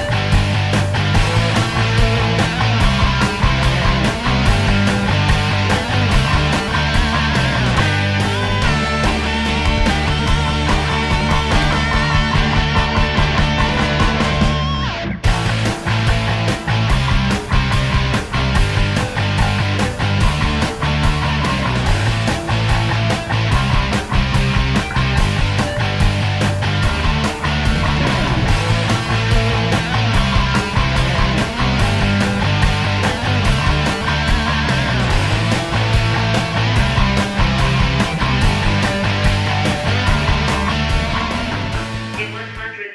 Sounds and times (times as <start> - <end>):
Music: 0.0 - 42.9.